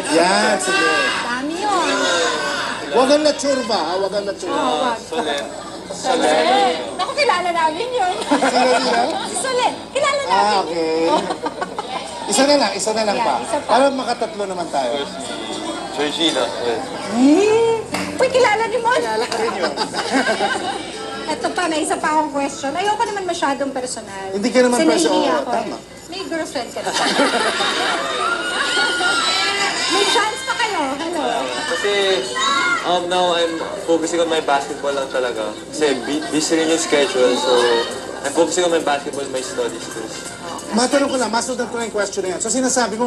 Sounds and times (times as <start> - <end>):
Television: 0.0 - 43.0.